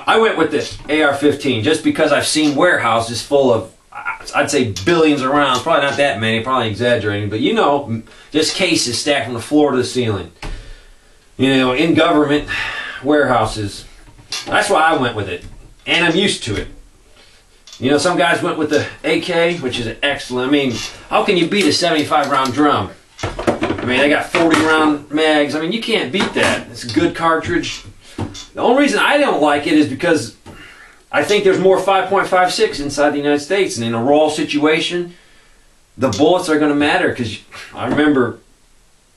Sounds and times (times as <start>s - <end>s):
Speech: 0.0s - 10.4s, 11.4s - 16.8s, 17.7s - 23.0s, 23.8s - 30.4s, 31.1s - 35.2s, 36.0s - 38.5s.